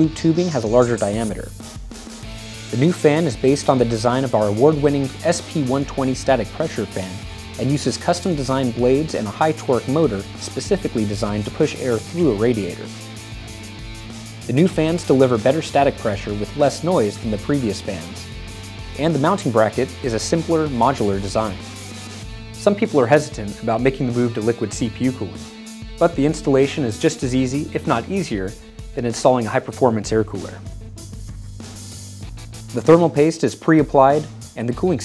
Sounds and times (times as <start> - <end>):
Speech: 0.0 - 1.6, 2.7 - 12.9, 14.5 - 18.3, 19.0 - 21.6, 22.6 - 25.4, 26.0 - 30.6, 32.7 - 35.0
Music: 0.0 - 35.0.